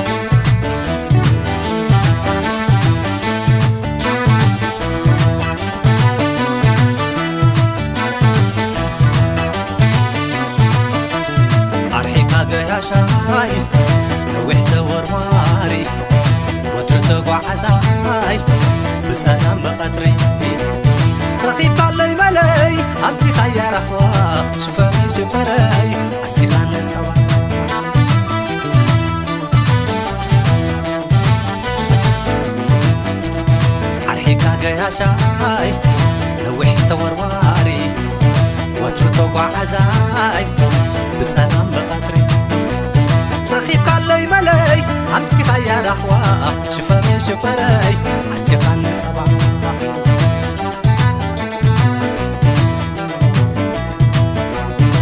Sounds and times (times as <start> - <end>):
Music: 0.0 - 55.0.